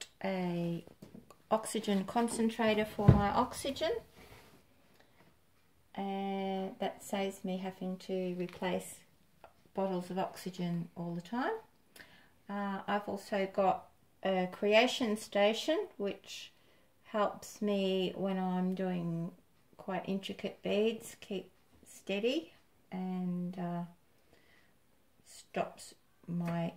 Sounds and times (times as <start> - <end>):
Speech: 0.0 - 0.9, 1.5 - 4.1, 6.0 - 9.1, 9.8 - 11.7, 12.5 - 24.0, 25.3 - 26.7.